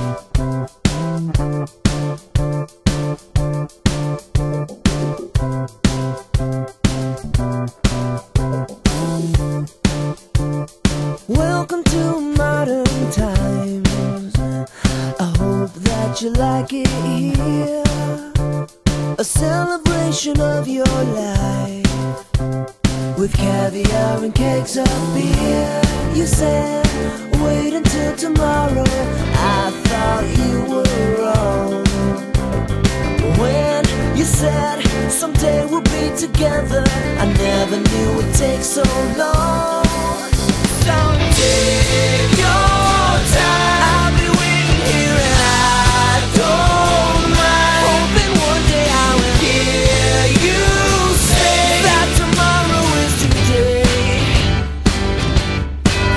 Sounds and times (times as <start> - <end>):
Music: 0.0 - 56.1.